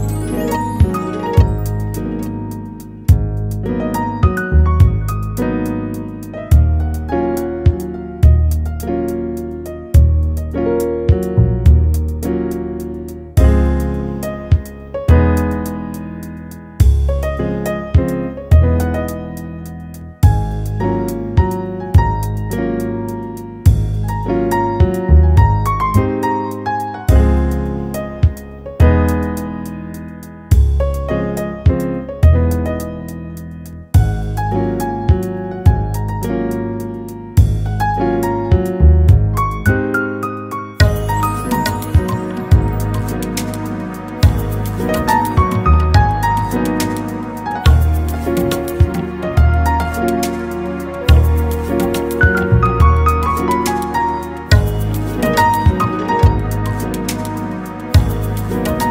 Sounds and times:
Music: 0.0s - 58.9s.

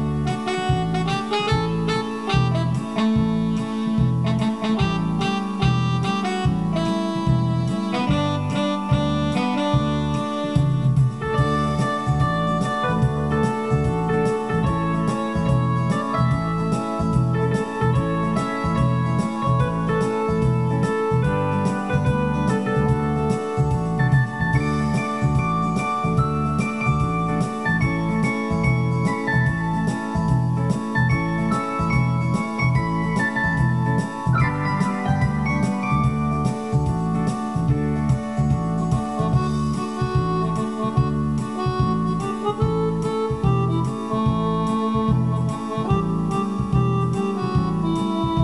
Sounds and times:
Music: 0.0s - 48.4s.

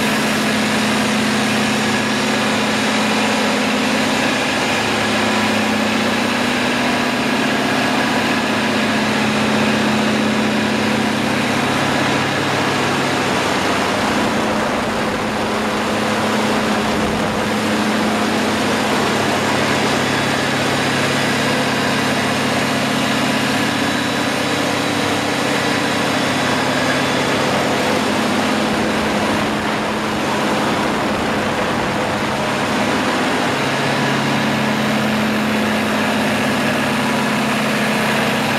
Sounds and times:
Heavy engine (low frequency): 0.0s - 38.5s
Idling: 0.0s - 38.5s.

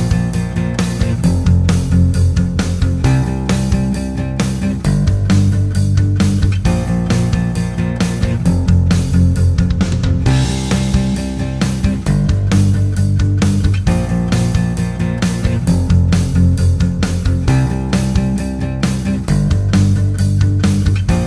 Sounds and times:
Acoustic guitar: 0.0s - 21.2s.

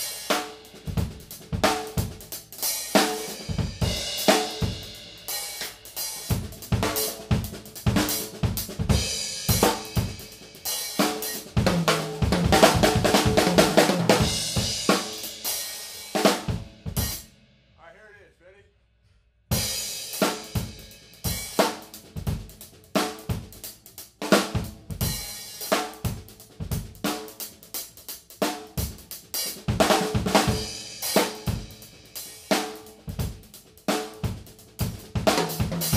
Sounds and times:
Cymbal: 0.0s - 13.4s, 14.1s - 17.8s, 19.5s - 35.9s
Drum: 0.0s - 17.4s, 19.5s - 35.9s
Drum kit: 0.0s - 18.2s, 19.5s - 35.9s.

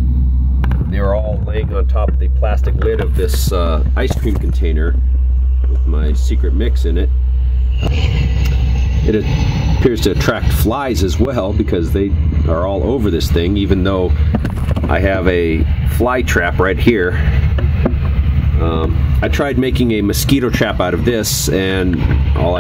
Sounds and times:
Speech: 0.9s - 5.0s, 5.7s - 7.1s, 9.0s - 14.2s, 14.9s - 17.3s, 18.6s - 22.6s.

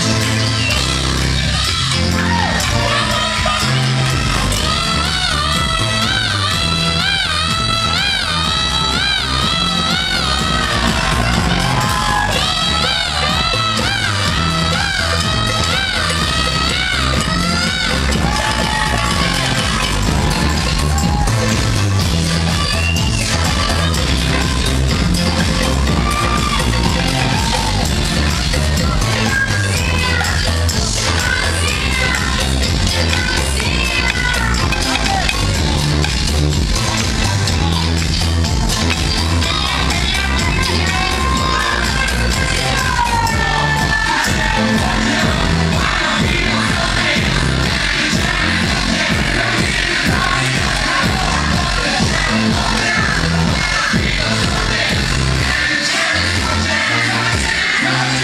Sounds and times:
Music: 0.0s - 58.2s.

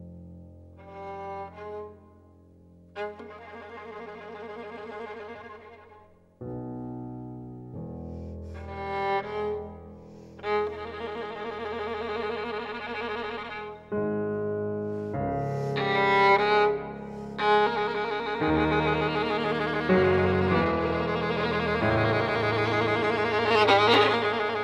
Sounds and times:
Violin, fiddle: 0.8s - 2.1s, 3.0s - 6.2s, 8.4s - 14.2s, 14.9s - 24.6s.

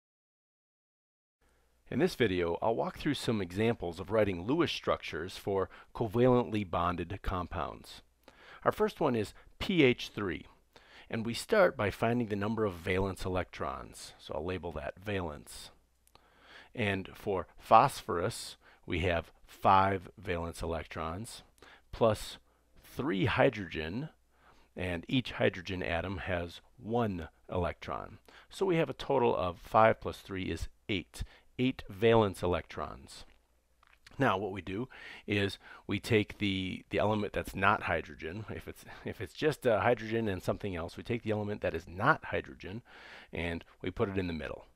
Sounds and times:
Speech: 1.9s - 15.8s, 16.7s - 24.2s, 24.8s - 33.4s, 34.1s - 44.7s.

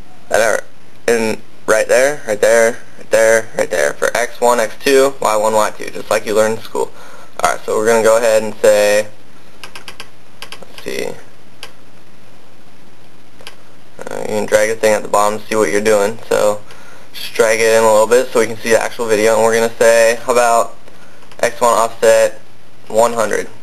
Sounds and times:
Inside, small room: 0.0s - 23.6s
Speech: 0.3s - 9.2s, 10.7s - 11.3s, 14.0s - 16.6s, 17.2s - 20.8s, 21.4s - 23.6s.

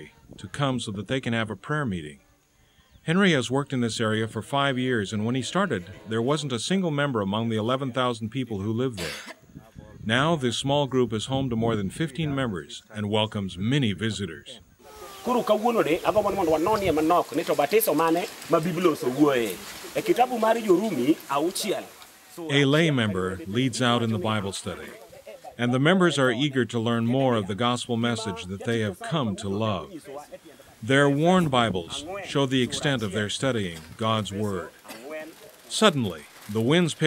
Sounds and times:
Speech: 3.1s - 14.6s, 15.2s - 37.0s
Rain on surface: 14.9s - 25.4s, 34.6s - 37.0s.

